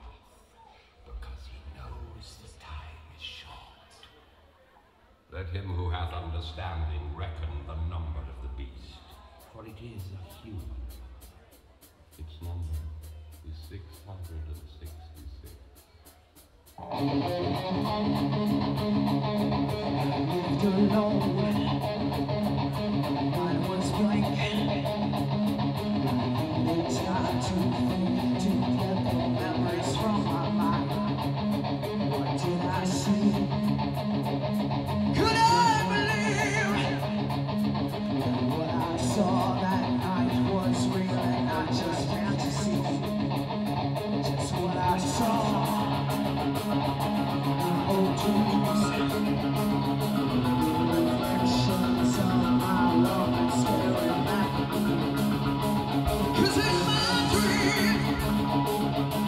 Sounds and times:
Rock and roll: 16.7s - 59.2s.

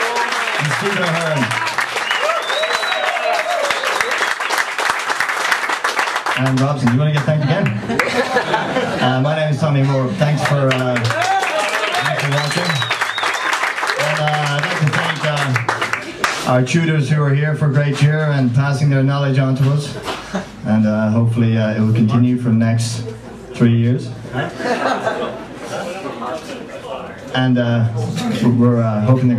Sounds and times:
Speech: 0.6s - 1.6s, 6.4s - 7.9s, 9.0s - 11.2s, 11.9s - 12.9s, 14.0s - 15.6s, 16.5s - 20.0s, 20.6s - 24.2s, 26.8s - 29.3s.

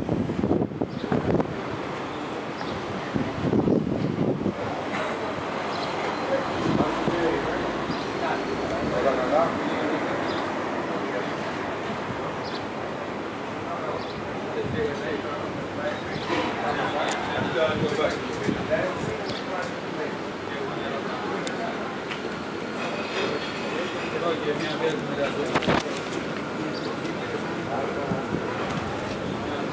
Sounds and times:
Speech: 4.4s - 29.7s.

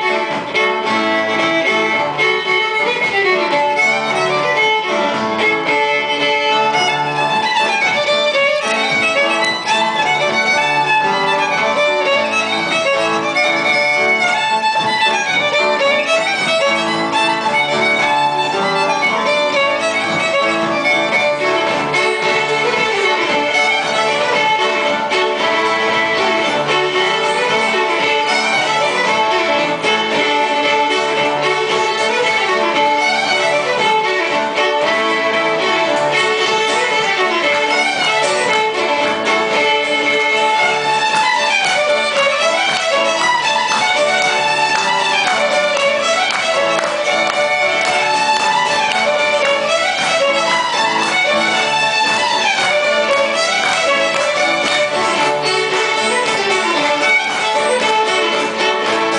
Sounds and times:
Violin, fiddle: 0.0s - 59.1s.

